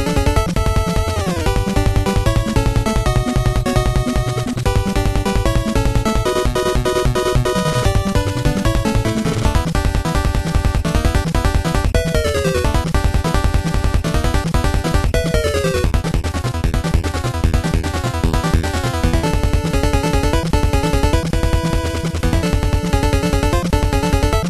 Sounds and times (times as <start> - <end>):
Music: 0.0 - 24.4.